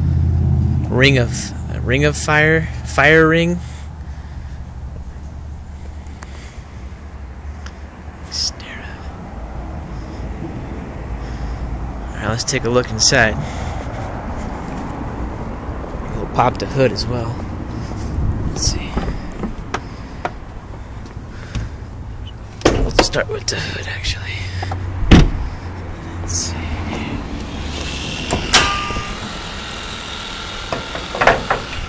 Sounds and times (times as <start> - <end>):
Outside, urban or manmade: 0.0 - 31.8
Vehicle: 0.0 - 31.8
Speech: 0.9 - 3.6, 12.1 - 13.4, 16.1 - 17.4, 22.8 - 24.5.